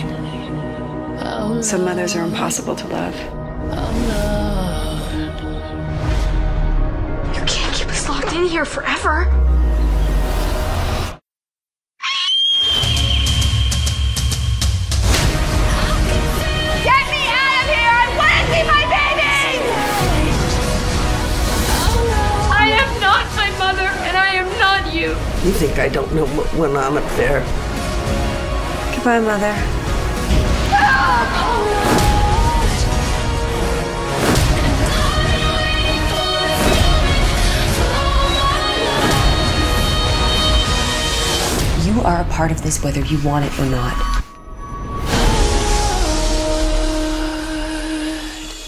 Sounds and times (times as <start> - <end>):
Music: 0.0 - 11.2, 12.6 - 48.6.